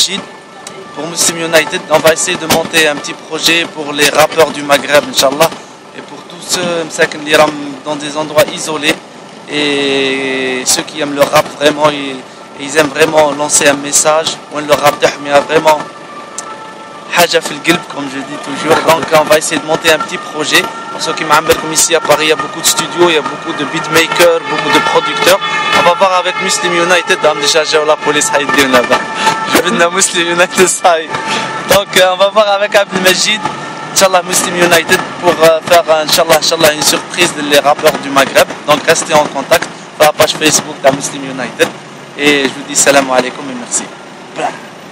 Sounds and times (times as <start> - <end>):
Speech: 0.0 - 15.9, 17.1 - 31.1, 31.7 - 33.4, 34.0 - 44.6.